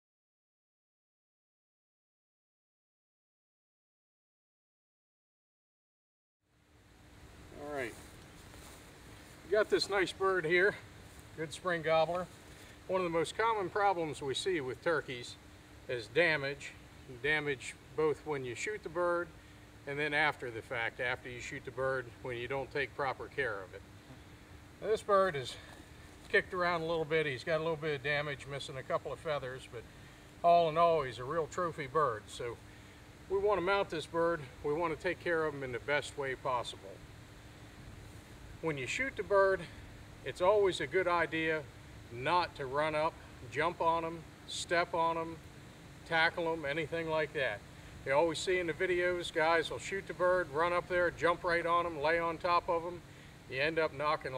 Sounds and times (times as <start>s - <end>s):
Speech: 7.5s - 8.0s, 9.5s - 10.8s, 11.4s - 12.3s, 12.9s - 19.3s, 19.9s - 23.8s, 24.8s - 25.7s, 26.3s - 29.8s, 30.4s - 32.6s, 33.3s - 37.0s, 38.6s - 45.4s, 46.0s - 54.3s.